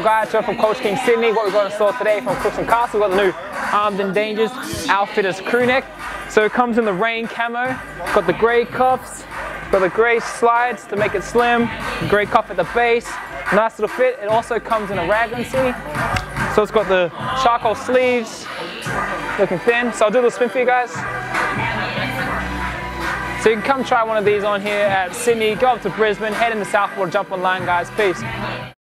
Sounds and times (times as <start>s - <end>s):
Speech: 0.0s - 9.2s, 9.8s - 16.0s, 16.6s - 18.6s, 19.4s - 21.0s, 23.4s - 28.3s
Music: 0.0s - 28.8s.